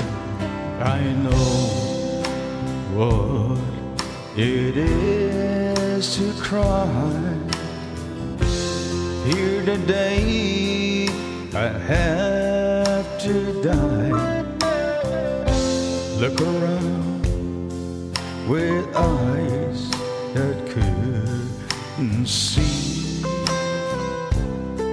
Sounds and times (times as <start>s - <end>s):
Music: 0.0s - 24.9s.